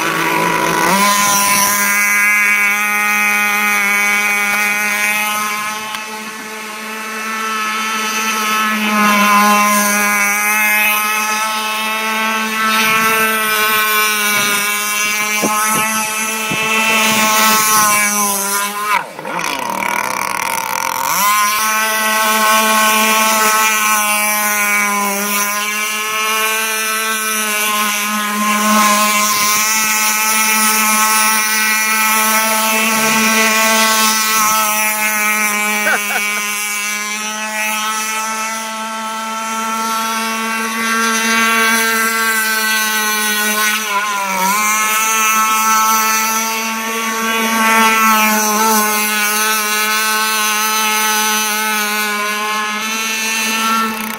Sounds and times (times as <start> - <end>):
Motorboat, speedboat: 0.0 - 54.1.